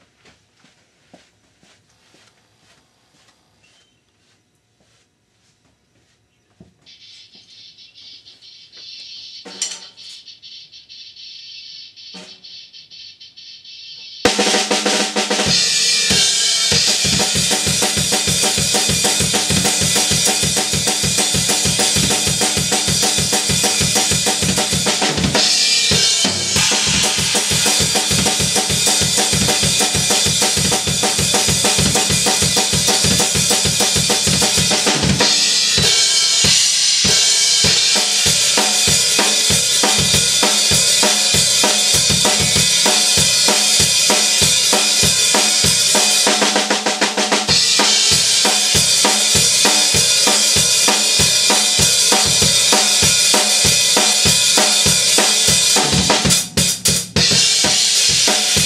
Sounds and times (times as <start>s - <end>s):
Drum kit: 12.1s - 12.5s, 14.3s - 58.6s
Rimshot: 14.3s - 56.6s
Drum roll: 14.3s - 58.6s
Bass drum: 15.4s - 46.0s.